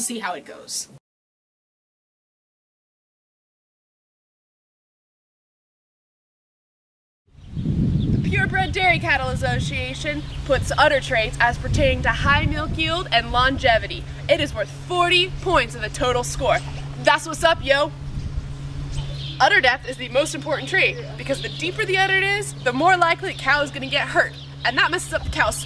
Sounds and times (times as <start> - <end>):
Speech: 0.0 - 1.0, 8.3 - 17.9, 19.4 - 25.6.